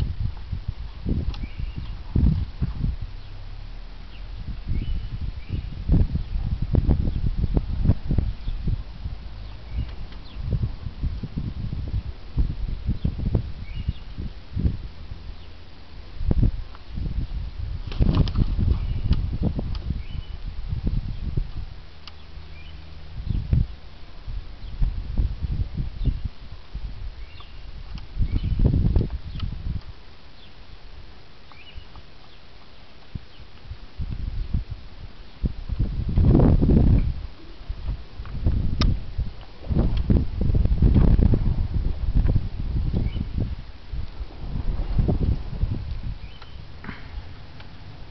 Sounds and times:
Outside, rural or natural: 0.0s - 48.1s.

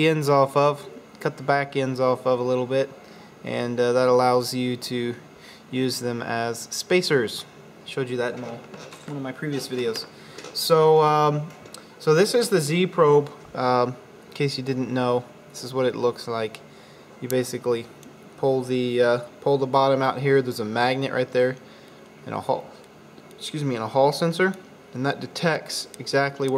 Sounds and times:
Speech: 0.0s - 16.6s, 17.2s - 21.6s, 22.2s - 22.8s, 23.4s - 26.5s.

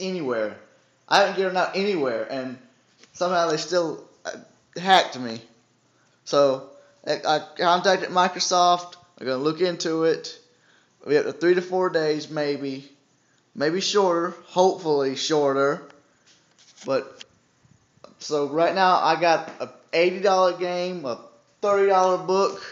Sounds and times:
Speech: 0.0s - 2.6s, 3.2s - 5.5s, 6.3s - 10.4s, 11.0s - 13.0s, 13.6s - 15.9s, 16.8s - 17.2s, 18.1s - 22.7s
Inside, small room: 0.0s - 22.7s.

